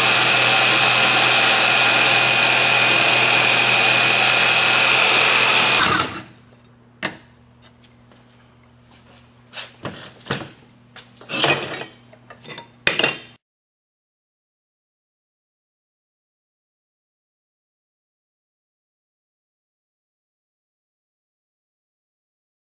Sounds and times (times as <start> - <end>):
Sawing: 0.0 - 6.4
Dishes, pots, and pans: 11.3 - 13.4.